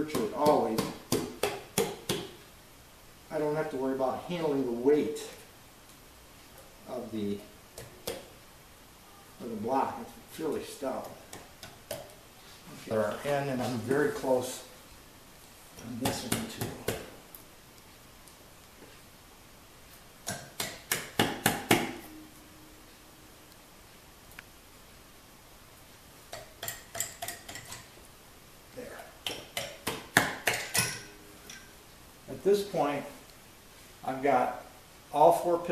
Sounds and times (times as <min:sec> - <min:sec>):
Speech: 0:00.0 - 0:01.0, 0:03.3 - 0:05.5, 0:06.8 - 0:07.5, 0:09.4 - 0:11.2, 0:12.7 - 0:14.7, 0:15.8 - 0:17.1, 0:28.8 - 0:29.2, 0:32.3 - 0:33.2, 0:34.0 - 0:35.7
Inside, small room: 0:00.0 - 0:35.7.